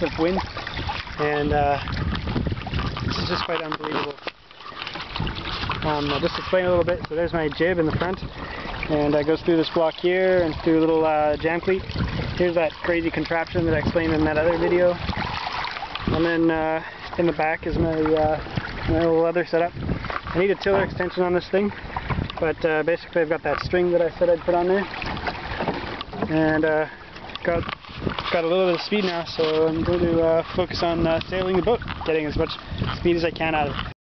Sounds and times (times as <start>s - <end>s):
Speech: 0.0s - 0.4s, 1.2s - 1.8s, 3.1s - 4.2s, 5.8s - 8.2s, 8.9s - 15.0s, 16.2s - 19.7s, 20.4s - 21.8s, 22.4s - 24.9s, 26.3s - 27.7s, 28.3s - 33.8s
Rowboat, canoe, kayak: 0.0s - 34.0s.